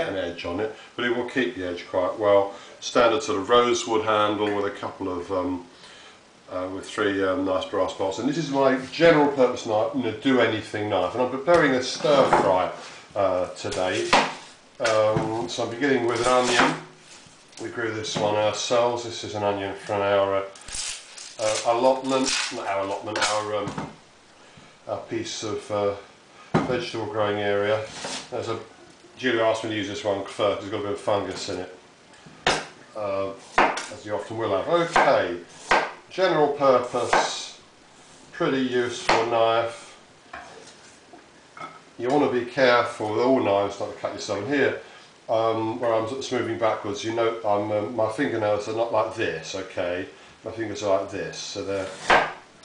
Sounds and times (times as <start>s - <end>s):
Speech: 0.0s - 5.7s, 6.5s - 16.9s, 17.6s - 20.6s, 21.4s - 23.9s, 24.9s - 31.8s, 32.9s - 35.5s, 36.1s - 37.6s, 38.3s - 40.0s, 42.0s - 52.2s.